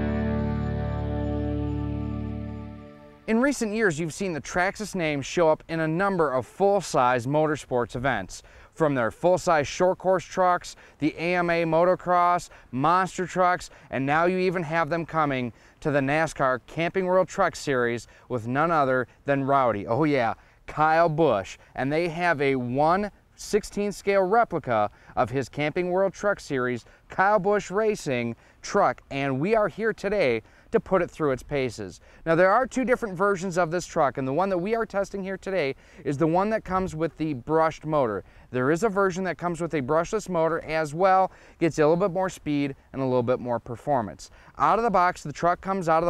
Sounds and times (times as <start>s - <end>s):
Speech: 3.3s - 46.0s.